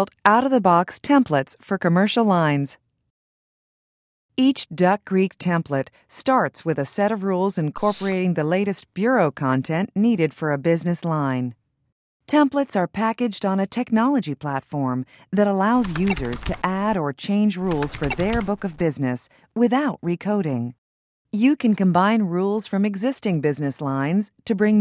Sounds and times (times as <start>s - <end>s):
Speech: 0.0s - 2.8s, 4.4s - 11.6s, 12.3s - 20.8s, 21.4s - 24.8s.